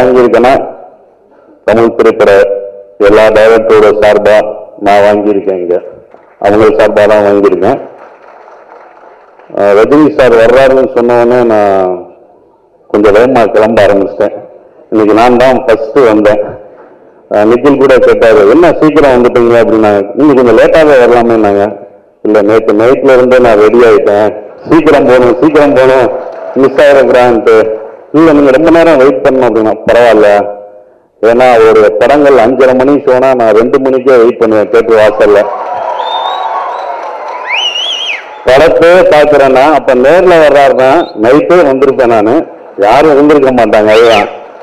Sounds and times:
Male speech, man speaking: 0.0 - 0.8, 1.7 - 7.9, 9.5 - 12.1, 12.9 - 16.6, 17.3 - 35.5, 38.5 - 44.4
Narration, monologue: 0.0 - 35.8, 38.0 - 44.6.

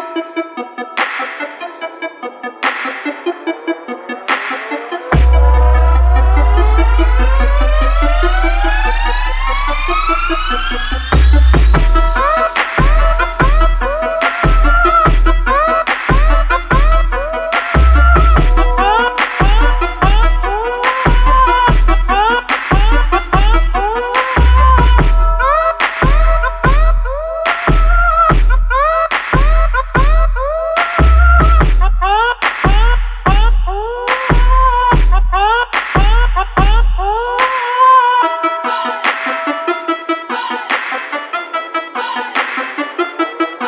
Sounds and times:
Exciting music: 0.0 - 30.2, 30.8 - 43.6.

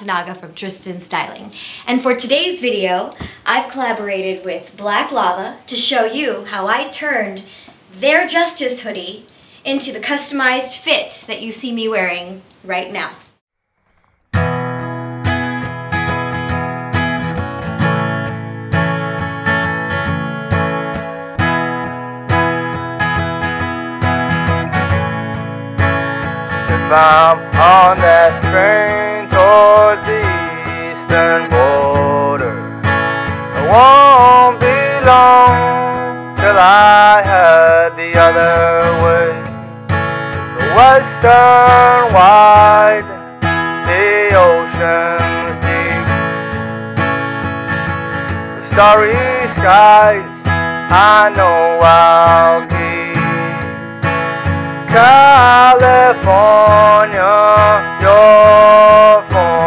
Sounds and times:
Music: 14.0 - 59.6.

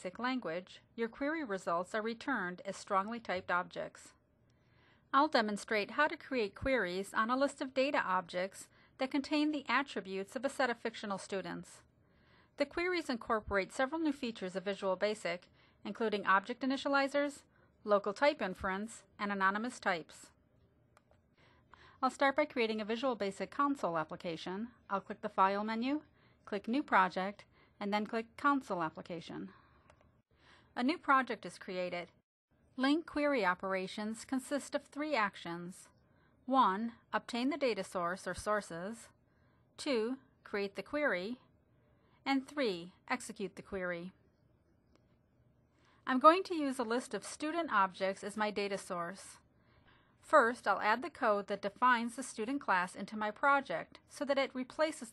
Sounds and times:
Speech: 0.0 - 4.2, 5.1 - 11.9, 12.6 - 20.4, 22.0 - 29.6, 30.8 - 32.2, 32.8 - 35.9, 36.5 - 39.2, 39.8 - 41.5, 42.2 - 44.2, 46.0 - 49.4, 50.2 - 55.1.

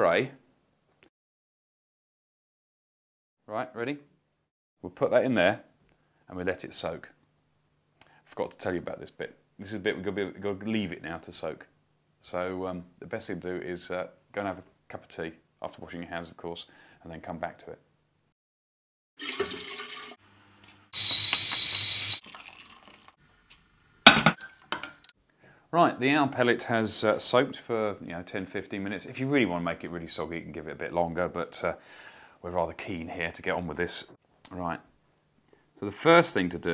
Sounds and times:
Speech: 0.0 - 0.4, 3.5 - 4.1, 4.8 - 5.7, 6.3 - 7.2, 8.3 - 17.9, 25.7 - 31.8, 32.4 - 34.9, 35.8 - 36.7.

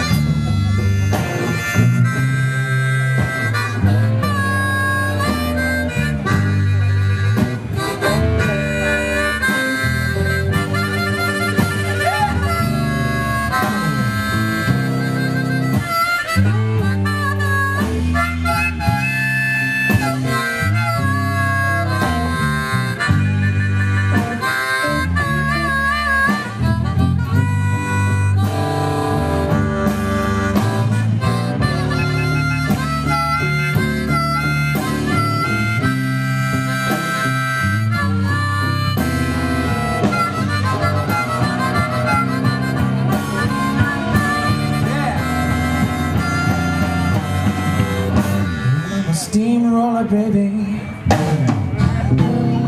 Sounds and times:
Blues: 0.0 - 52.6.

